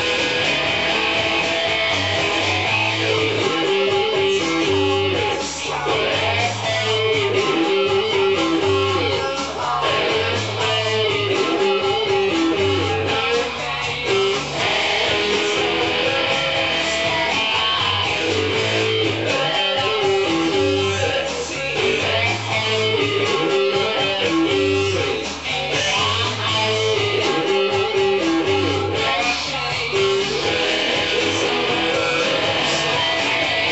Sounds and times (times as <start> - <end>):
Bass guitar: 0.0 - 33.7.